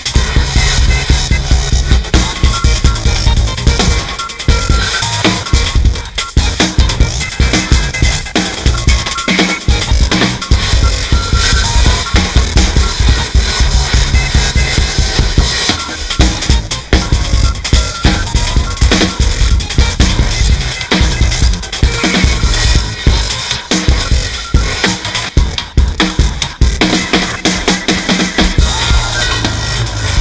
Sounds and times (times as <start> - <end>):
Drum: 0.0 - 30.2
Drum kit: 0.0 - 30.2.